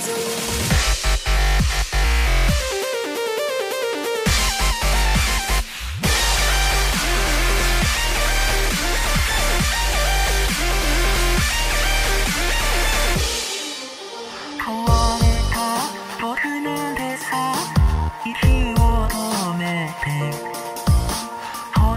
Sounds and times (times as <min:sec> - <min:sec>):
Dubstep: 0:00.0 - 0:21.9.